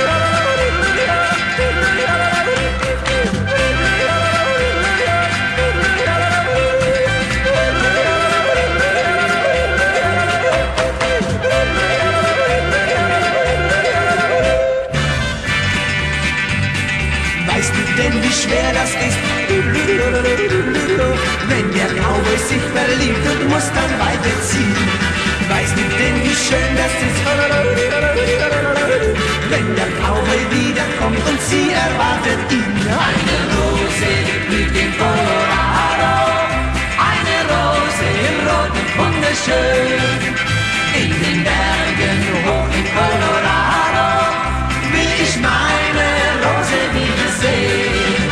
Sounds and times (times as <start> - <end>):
Music: 0.0 - 48.3.